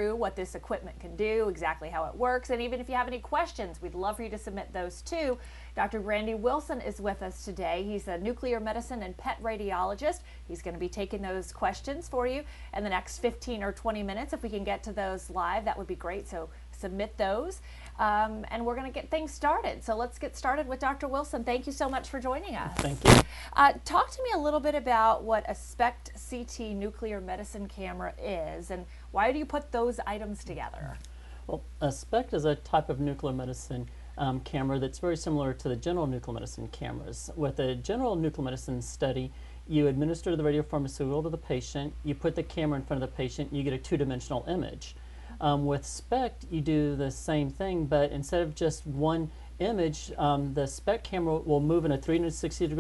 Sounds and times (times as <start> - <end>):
Speech: 0.0 - 52.8.